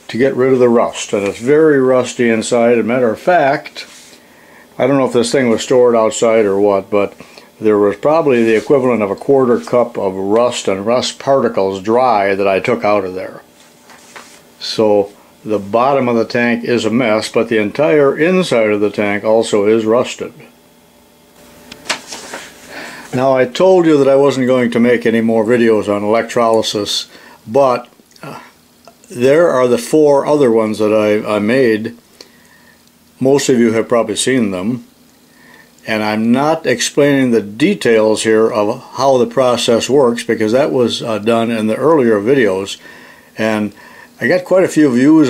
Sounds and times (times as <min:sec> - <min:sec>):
Speech: 0:00.0 - 0:04.0, 0:04.8 - 0:13.5, 0:14.6 - 0:20.6, 0:23.1 - 0:32.0, 0:33.2 - 0:34.9, 0:35.8 - 0:42.8, 0:43.4 - 0:45.2
Inside, small room: 0:00.0 - 0:45.2.